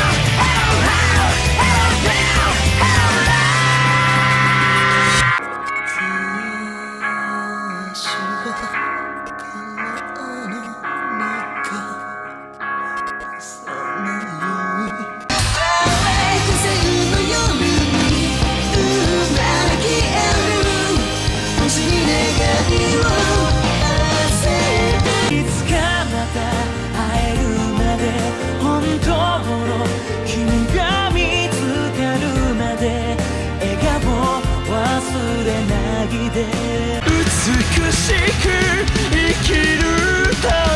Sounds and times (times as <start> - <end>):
Music: 0.0 - 40.7.